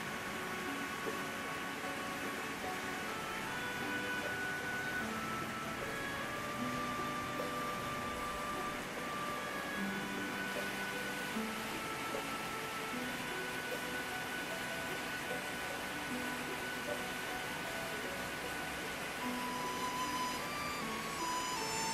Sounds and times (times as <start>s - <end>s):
Music: 0.0s - 21.9s
Rain on surface: 0.0s - 21.9s.